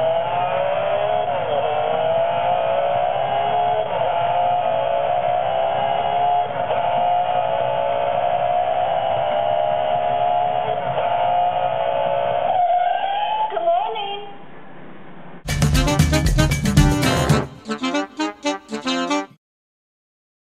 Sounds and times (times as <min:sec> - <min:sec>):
Speech: 0:13.4 - 0:14.4
Music: 0:15.5 - 0:19.4.